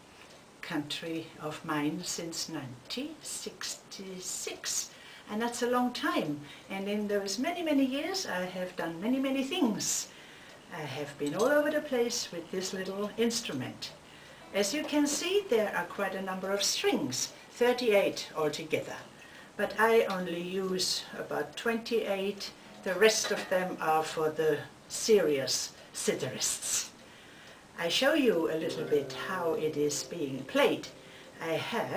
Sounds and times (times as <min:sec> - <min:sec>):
Speech: 0:00.6 - 0:10.1, 0:10.7 - 0:27.0, 0:27.8 - 0:31.9.